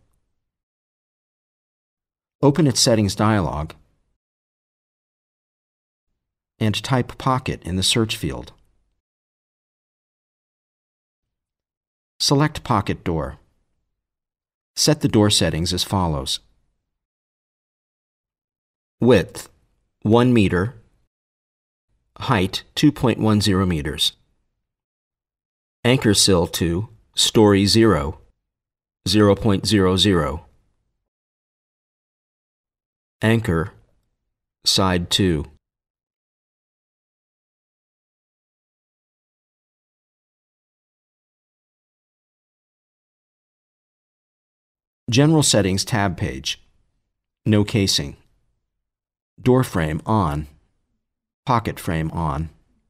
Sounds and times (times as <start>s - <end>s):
Speech: 2.4s - 3.8s, 6.6s - 8.6s, 12.2s - 13.4s, 14.8s - 16.5s, 19.0s - 19.5s, 20.1s - 20.8s, 22.2s - 24.2s, 25.8s - 28.3s, 29.1s - 30.5s, 33.2s - 33.8s, 34.7s - 35.6s, 45.1s - 46.6s, 47.5s - 48.3s, 49.4s - 50.6s, 51.5s - 52.6s.